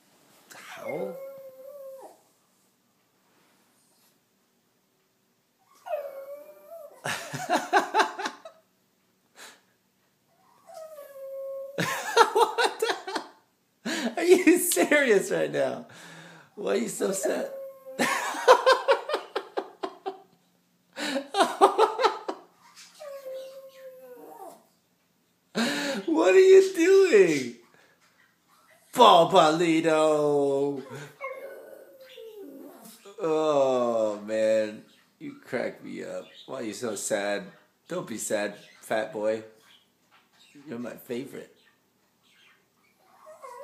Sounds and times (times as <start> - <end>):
Whimper (dog): 0.6 - 2.2, 5.7 - 7.1, 10.4 - 11.8, 22.8 - 24.6, 30.9 - 33.0, 42.9 - 43.6
Speech: 14.2 - 15.9, 16.6 - 17.6, 26.0 - 27.6, 28.9 - 31.0, 33.1 - 39.5, 40.6 - 41.6.